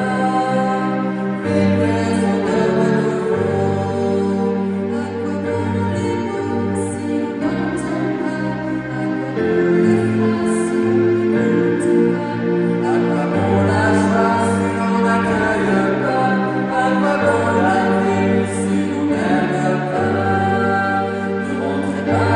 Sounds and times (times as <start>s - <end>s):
Music: 0.0s - 22.3s.